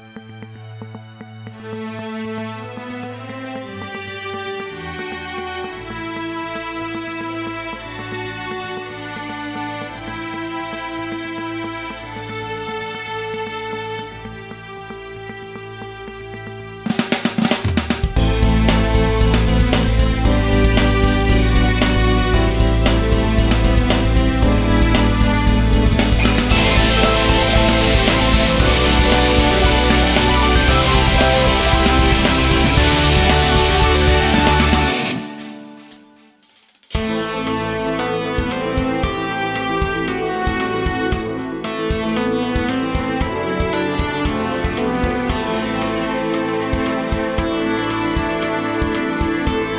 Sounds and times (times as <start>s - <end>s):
Music: 0.0s - 49.7s.